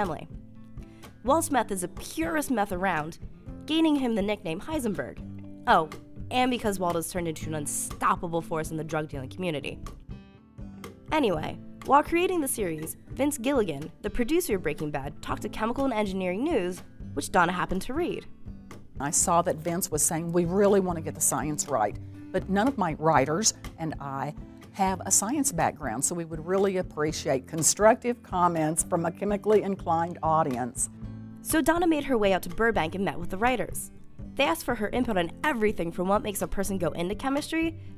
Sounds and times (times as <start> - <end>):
Speech: 0.0 - 0.3, 1.3 - 9.8, 11.1 - 18.3, 19.0 - 30.9, 31.5 - 37.8
Music: 0.0 - 37.9.